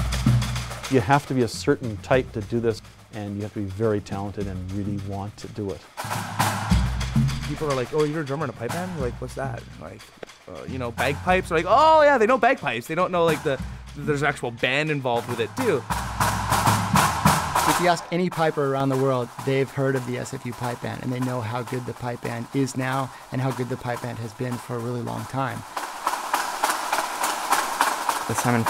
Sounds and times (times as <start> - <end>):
Music: 0.0 - 28.7
Speech: 0.9 - 5.8, 7.5 - 15.9, 17.7 - 25.6, 28.3 - 28.7.